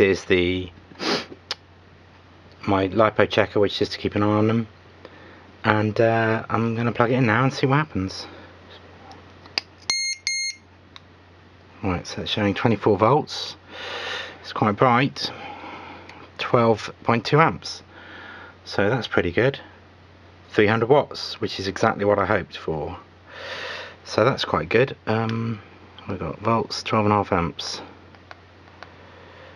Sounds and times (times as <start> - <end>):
Speech: 0.0 - 0.8, 2.6 - 4.7, 5.6 - 8.4, 11.8 - 13.6, 14.4 - 15.4, 16.4 - 17.9, 18.7 - 19.8, 20.5 - 23.1, 24.0 - 28.0.